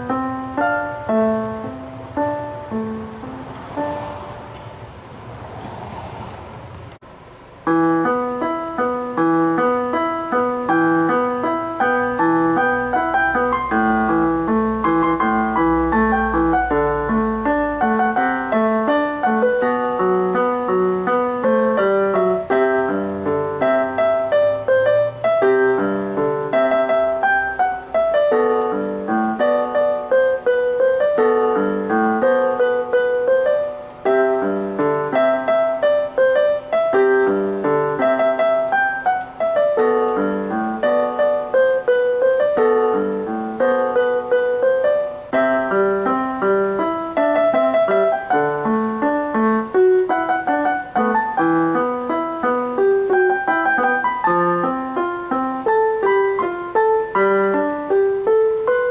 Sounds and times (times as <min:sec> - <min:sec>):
Piano: 0:00.0 - 0:58.9.